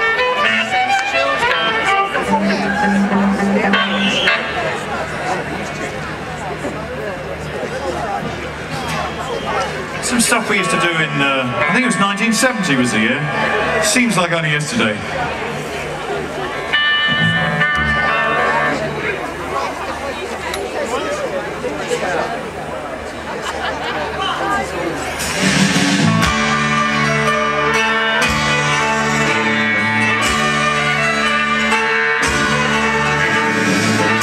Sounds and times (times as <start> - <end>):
Music: 0.0 - 6.0, 10.1 - 13.9, 16.2 - 19.4, 25.1 - 34.2
Speech: 1.2 - 16.8, 18.3 - 25.4.